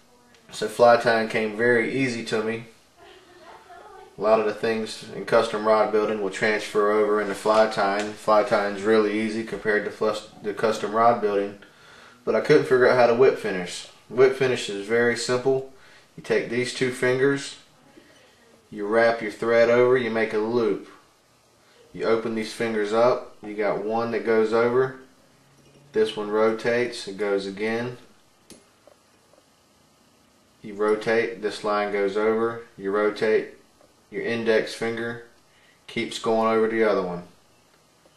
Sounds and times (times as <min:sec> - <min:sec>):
Speech: 0:00.0 - 0:11.6, 0:12.2 - 0:21.0, 0:21.8 - 0:25.1, 0:25.9 - 0:28.1, 0:30.6 - 0:35.3, 0:35.9 - 0:37.4.